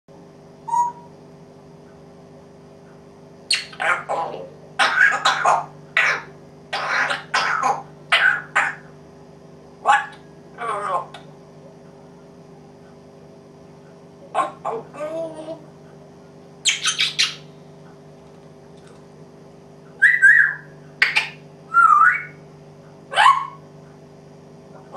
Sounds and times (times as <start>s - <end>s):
Bird: 0.7s - 1.1s, 3.5s - 8.9s, 16.6s - 17.5s, 20.0s - 22.4s
Domestic animals, pets: 3.5s - 8.9s, 9.8s - 11.3s, 14.2s - 15.8s, 16.6s - 17.5s, 23.1s - 23.6s, 24.8s - 24.9s.